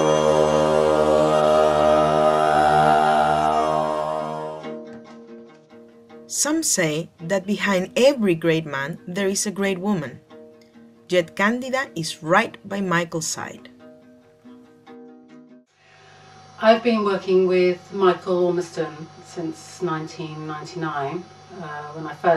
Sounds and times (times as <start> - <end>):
Music: 0.0 - 22.3
Speech: 6.3 - 10.2, 11.1 - 13.7, 16.6 - 22.3.